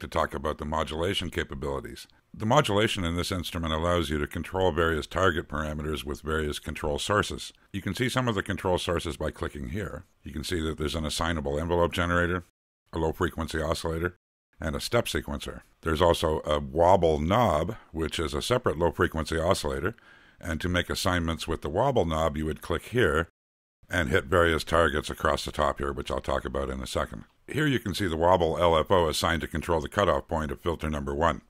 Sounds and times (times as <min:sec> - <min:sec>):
Speech: 0:00.0 - 0:23.3, 0:23.9 - 0:31.4.